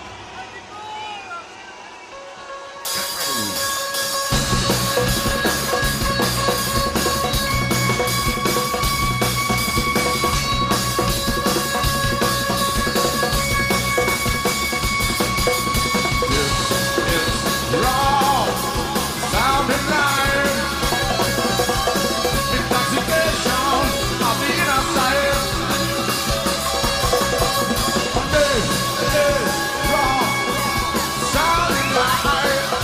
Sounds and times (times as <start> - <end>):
Music: 2.0 - 32.8.